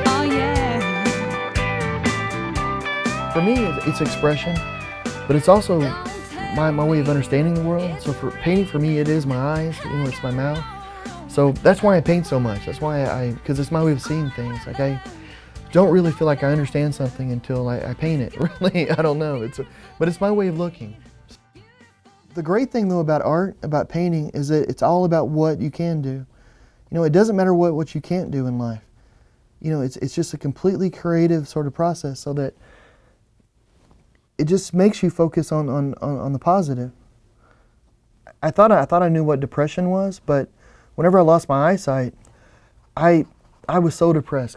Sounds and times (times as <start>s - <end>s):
Music: 0.0s - 23.5s
Speech: 3.4s - 4.6s, 5.3s - 10.7s, 11.3s - 15.1s, 15.7s - 21.0s, 22.3s - 26.3s, 26.9s - 28.9s, 29.6s - 32.6s, 34.4s - 37.0s, 38.3s - 42.2s, 43.0s - 44.5s.